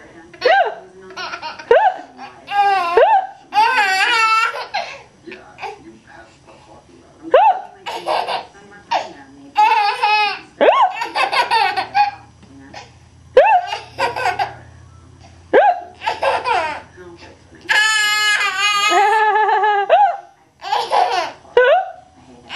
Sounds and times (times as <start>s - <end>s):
Speech: 0.0s - 4.6s, 5.2s - 13.0s, 16.2s - 19.2s, 20.2s - 22.5s.